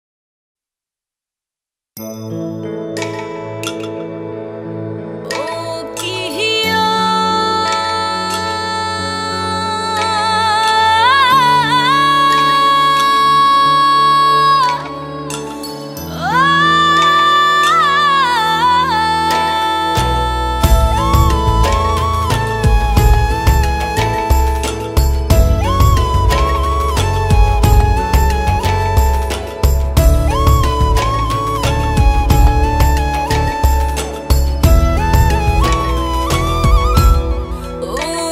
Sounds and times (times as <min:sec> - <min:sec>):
Music: 0:02.0 - 0:38.3.